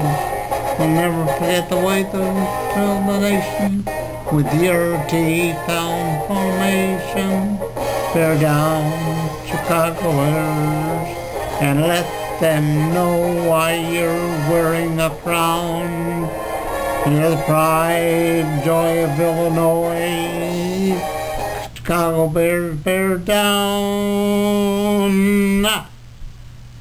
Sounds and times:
Male singing: 0.0s - 16.4s, 17.0s - 21.2s, 21.8s - 25.9s
Music: 0.0s - 21.7s.

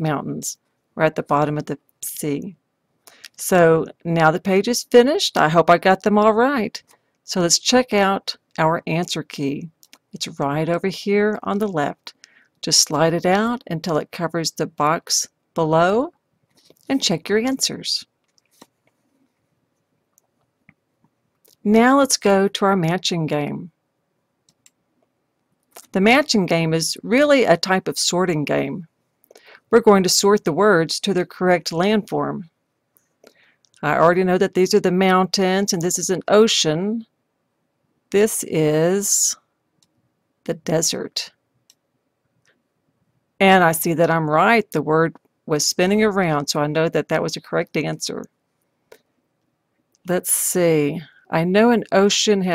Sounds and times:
Clicking: 24.5s - 25.1s.

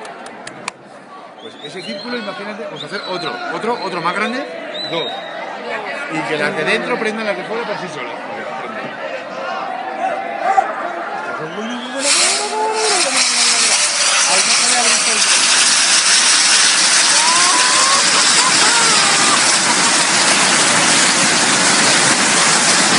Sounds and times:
Crowd: 0.0s - 22.9s
Speech: 1.1s - 10.1s, 11.1s - 15.3s
Firecracker: 12.0s - 22.9s.

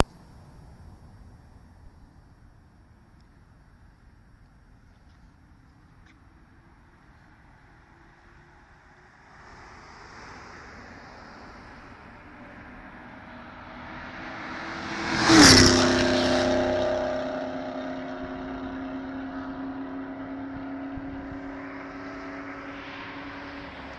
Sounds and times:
Race car, auto racing: 4.2s - 23.9s.

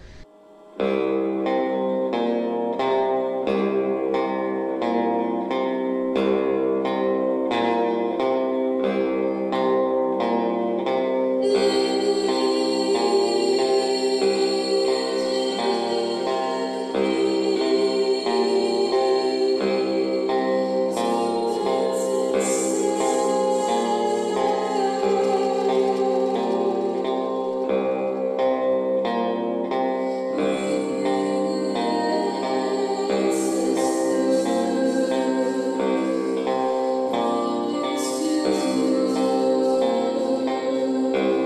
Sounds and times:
Echo: 0.0s - 41.4s
Music: 0.0s - 41.4s.

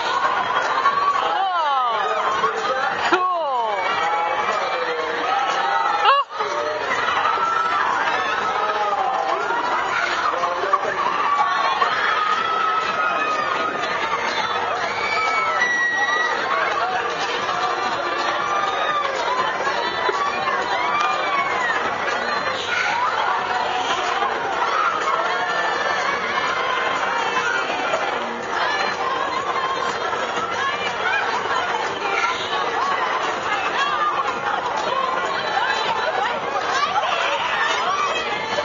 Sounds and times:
Chatter: 0.0s - 38.6s.

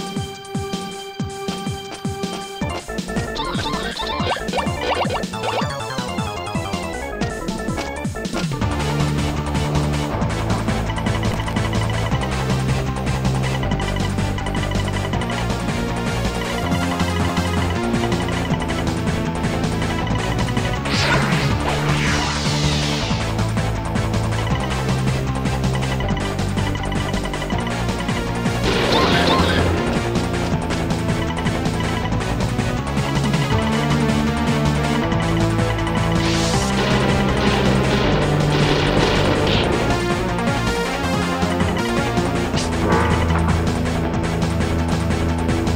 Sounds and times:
Video game music: 0.0s - 45.7s.

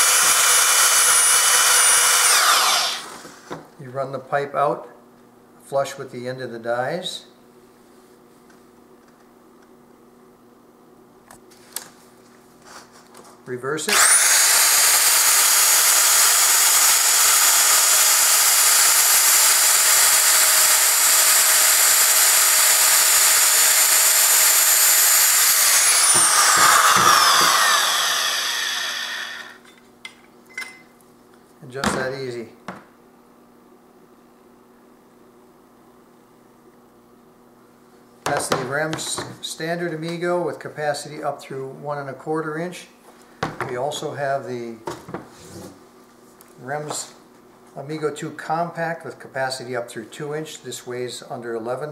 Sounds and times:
Speech: 3.8s - 5.0s, 5.6s - 7.4s, 13.4s - 13.9s, 31.6s - 32.6s, 38.3s - 43.0s, 43.6s - 44.9s, 46.6s - 47.2s, 47.8s - 51.9s.

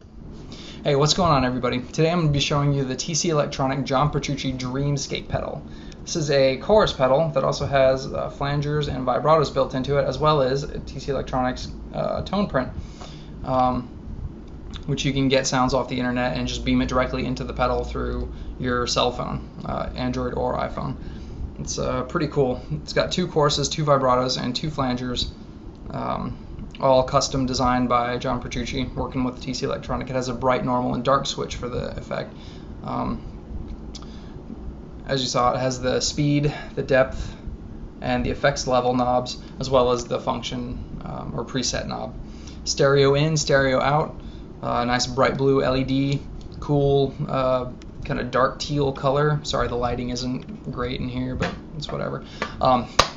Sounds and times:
Speech: 0.8s - 12.8s, 13.4s - 13.9s, 14.8s - 21.0s, 21.6s - 33.3s, 35.0s - 37.4s, 38.0s - 52.9s.

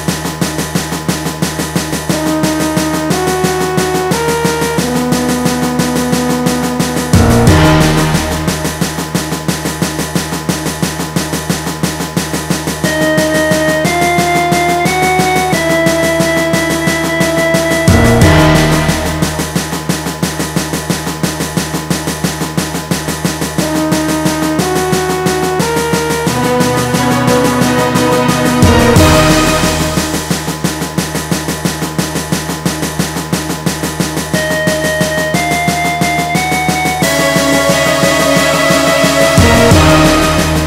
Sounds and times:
Soundtrack music: 1.5s - 10.2s, 12.7s - 20.3s, 23.6s - 30.9s, 34.4s - 40.6s
Middle Eastern music: 2.1s - 9.5s, 12.9s - 20.1s, 23.6s - 30.6s, 34.4s - 40.6s.

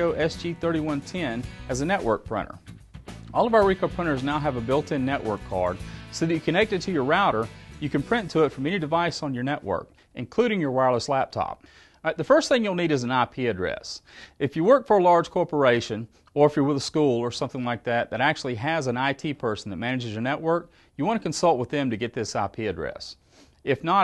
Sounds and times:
Speech: 0.0s - 2.6s, 3.4s - 24.0s.

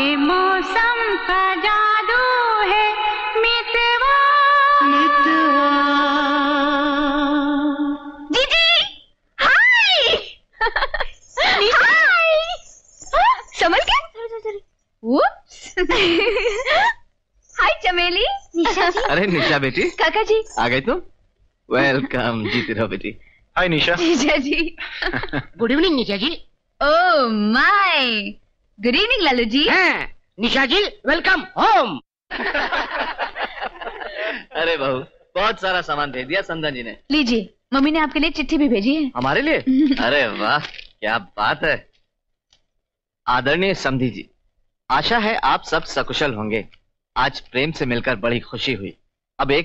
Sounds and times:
Speech: 17.6s - 21.0s, 21.7s - 32.0s, 34.1s - 37.9s, 38.8s - 41.8s, 43.3s - 44.3s, 44.9s - 49.6s.

